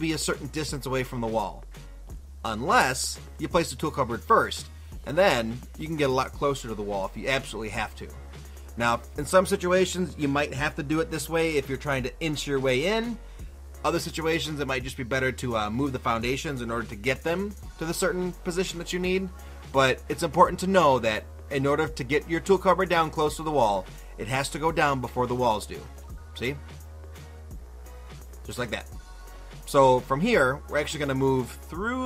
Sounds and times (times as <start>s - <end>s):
Speech: 0.0s - 1.6s, 2.4s - 8.2s, 8.8s - 13.2s, 13.8s - 26.6s, 28.5s - 29.0s, 29.7s - 32.0s
Music: 0.0s - 32.0s.